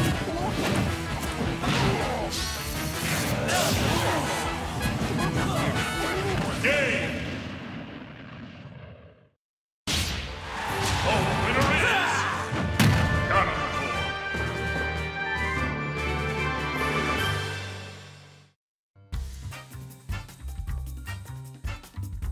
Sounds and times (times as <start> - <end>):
Music: 0.0 - 6.6, 10.3 - 22.3.